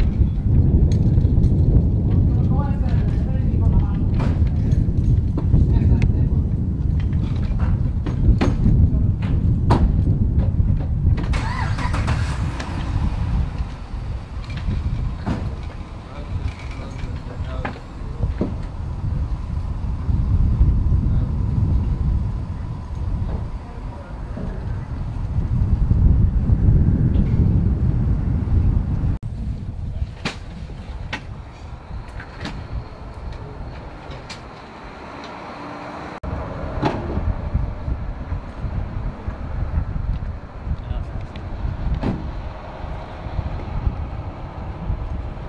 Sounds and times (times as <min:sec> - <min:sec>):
Outside, urban or manmade: 0:00.0 - 0:45.4
Speech: 0:02.3 - 0:04.6, 0:05.6 - 0:06.5, 0:16.1 - 0:18.5, 0:23.3 - 0:25.1, 0:40.8 - 0:41.5.